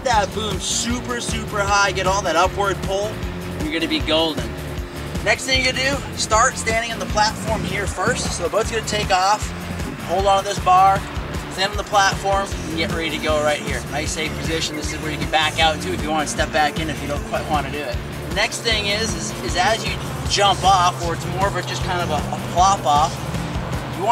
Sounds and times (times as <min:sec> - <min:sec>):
Speech: 0:00.0 - 0:04.5, 0:05.2 - 0:11.0, 0:11.6 - 0:23.2
Music: 0:00.0 - 0:24.1.